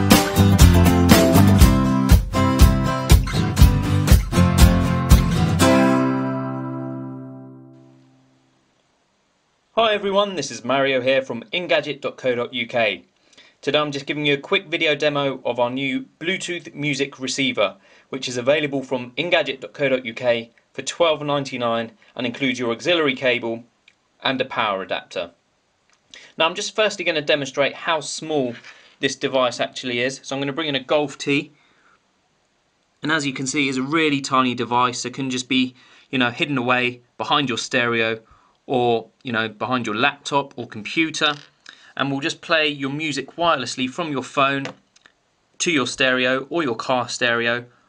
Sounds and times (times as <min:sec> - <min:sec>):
Speech: 0:09.8 - 0:25.4, 0:26.3 - 0:31.6, 0:33.0 - 0:44.8, 0:45.6 - 0:47.7.